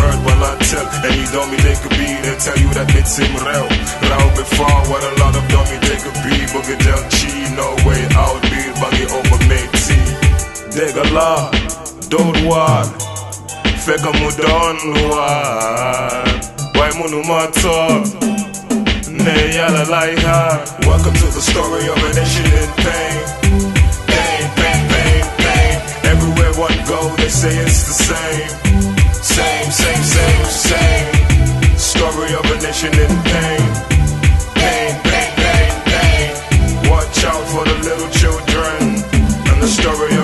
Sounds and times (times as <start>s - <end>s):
Rapping: 0.0s - 23.5s, 24.1s - 34.0s, 34.6s - 40.2s
Hip hop music: 0.0s - 40.2s.